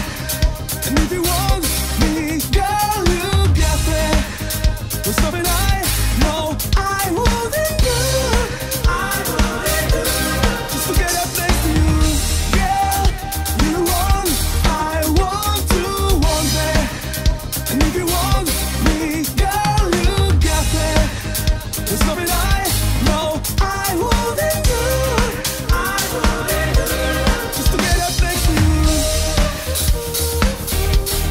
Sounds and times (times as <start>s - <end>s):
Drum: 0.0s - 31.3s
Drum kit: 0.0s - 31.3s.